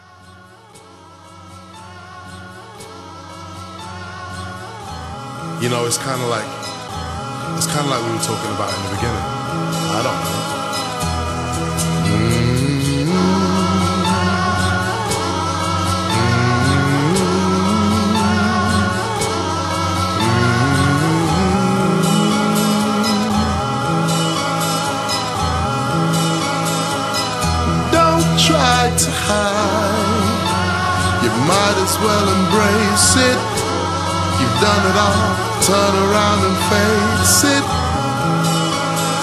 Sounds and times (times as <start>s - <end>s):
Electronica: 8.6s - 39.2s.